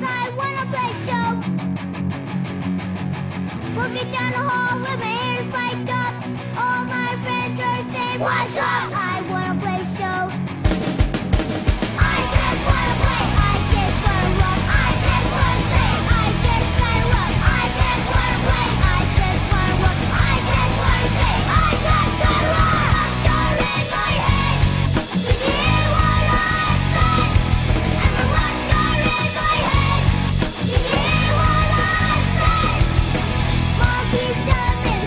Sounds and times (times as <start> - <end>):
Drum kit: 10.4 - 35.0
Bass drum: 10.7 - 35.0.